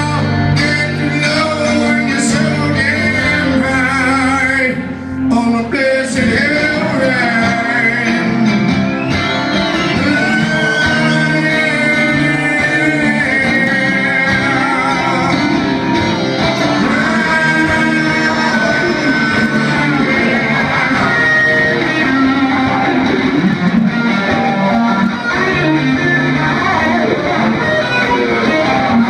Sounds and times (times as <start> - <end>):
Singing: 0.0 - 23.6
Music: 0.0 - 29.0.